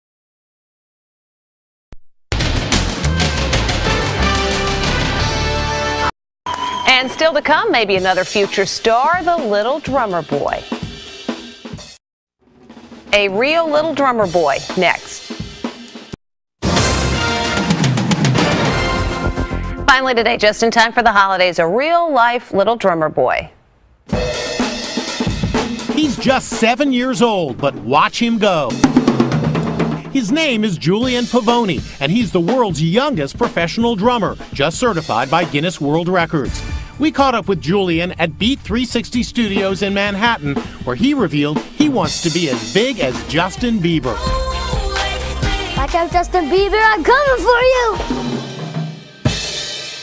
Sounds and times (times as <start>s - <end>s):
Music: 2.4s - 20.7s, 24.1s - 50.0s
Speech: 6.9s - 10.6s, 13.2s - 15.3s, 19.9s - 23.5s, 25.9s - 28.8s, 30.1s - 44.2s, 45.8s - 48.1s.